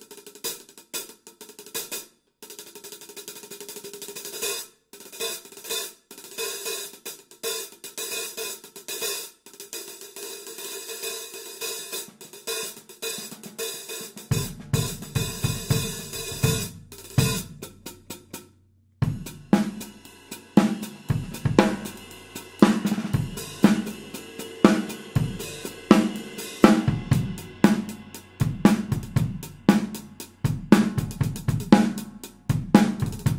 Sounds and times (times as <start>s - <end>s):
Music: 0.0s - 33.3s.